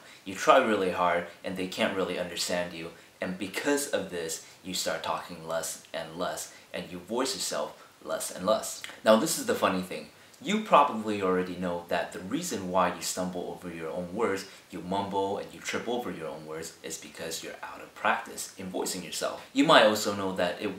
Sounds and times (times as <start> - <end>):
Male speech, man speaking: 0.0 - 20.7
Narration, monologue: 0.0 - 20.7.